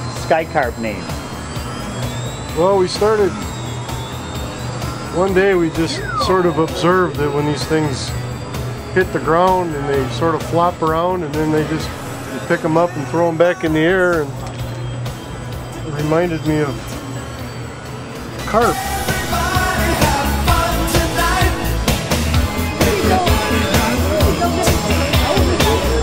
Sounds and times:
Music: 0.0 - 26.0.

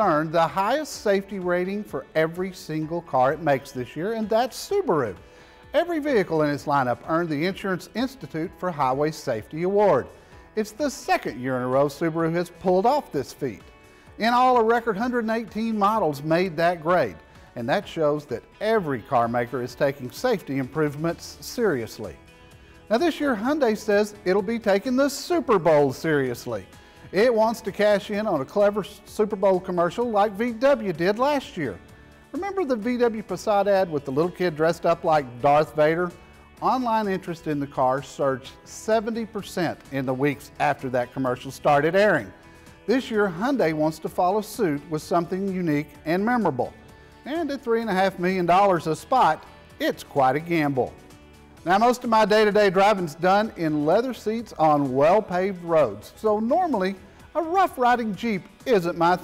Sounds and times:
Speech: 0.0 - 13.6, 14.2 - 22.2, 22.9 - 51.0, 51.6 - 59.2
Music: 0.0 - 59.2.

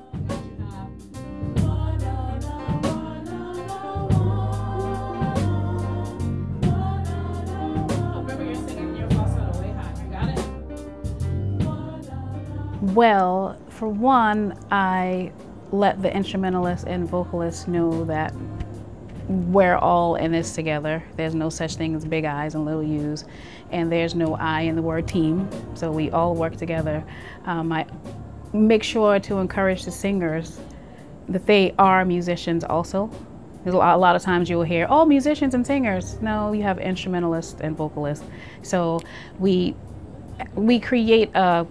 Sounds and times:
Music: 0.0 - 41.7
Speech: 8.3 - 10.5, 12.8 - 18.3, 19.3 - 27.9, 28.6 - 30.6, 40.4 - 41.7.

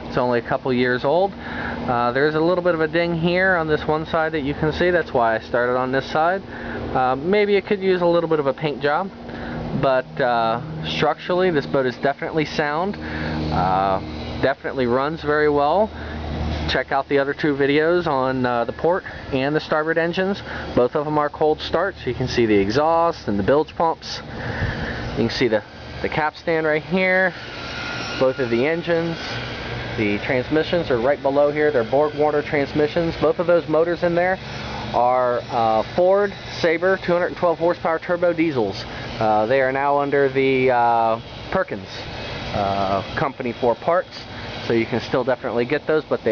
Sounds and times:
Speech: 0.1 - 9.2, 9.8 - 15.9, 16.7 - 24.3, 25.2 - 27.4, 28.2 - 29.3, 30.0 - 46.3.

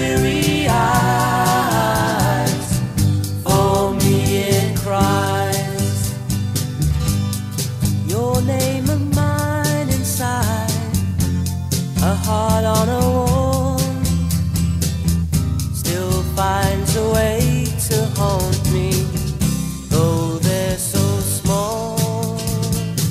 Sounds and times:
Music: 0.0 - 23.1.

